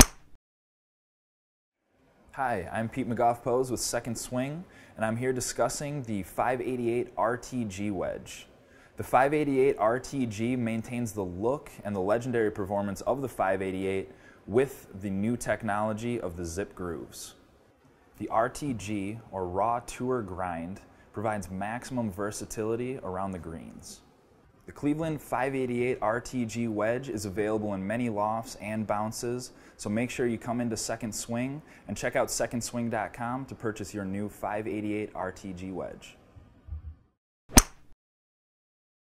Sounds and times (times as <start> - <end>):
Speech: 2.3 - 17.4, 18.2 - 24.1, 24.7 - 36.2.